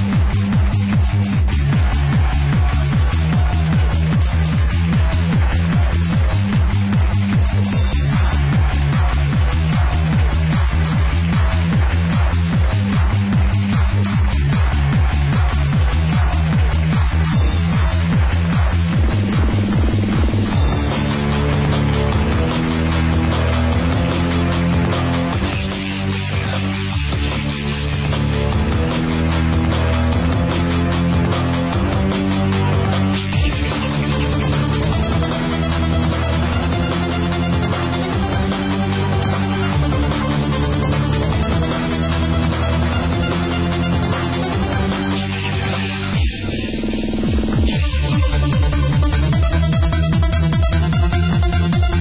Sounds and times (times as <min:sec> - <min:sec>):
Music: 0:00.0 - 0:52.0.